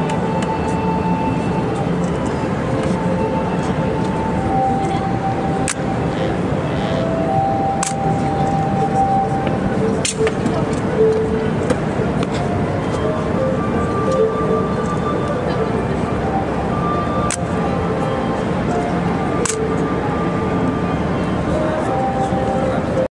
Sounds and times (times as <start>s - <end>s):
Music: 0.0s - 23.1s.